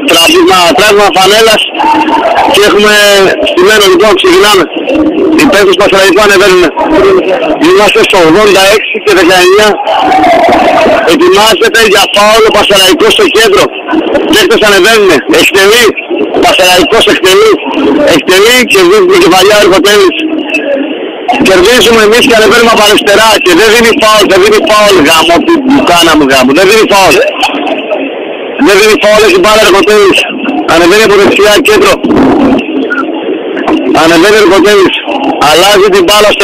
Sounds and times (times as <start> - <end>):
Speech: 0.0 - 28.0, 28.6 - 32.0, 32.9 - 36.4
Radio: 0.0 - 36.4.